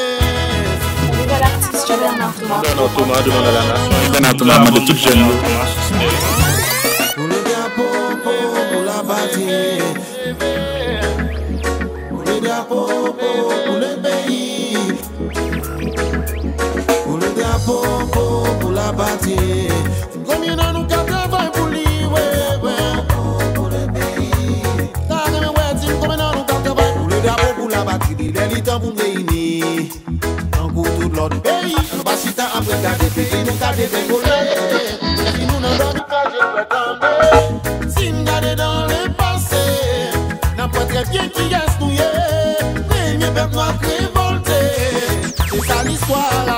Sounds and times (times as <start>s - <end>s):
Music of Latin America: 0.0s - 46.5s
Reggae: 0.0s - 46.5s.